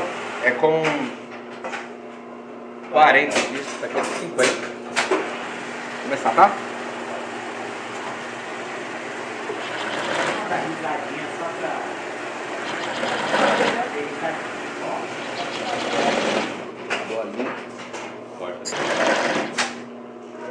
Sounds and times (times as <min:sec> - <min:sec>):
Speech: 0:02.9 - 0:04.6, 0:10.4 - 0:11.9, 0:13.7 - 0:16.0
Sewing machine: 0:09.5 - 0:10.7, 0:12.6 - 0:13.9, 0:15.2 - 0:16.6, 0:18.7 - 0:19.8.